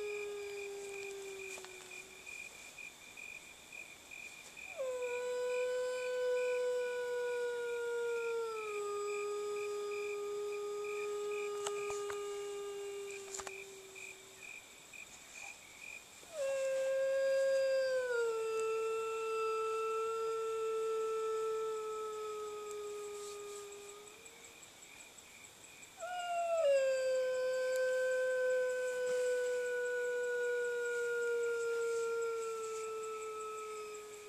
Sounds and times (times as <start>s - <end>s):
Howl: 0.0s - 2.4s, 4.7s - 14.5s, 16.3s - 24.5s, 26.0s - 34.2s.